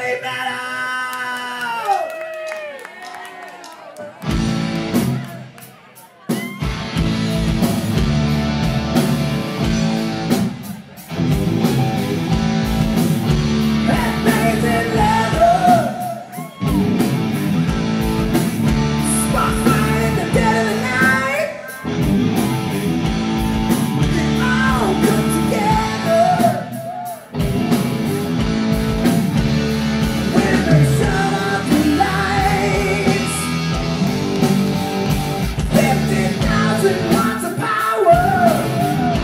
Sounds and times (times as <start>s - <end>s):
Heavy metal: 6.5s - 39.2s.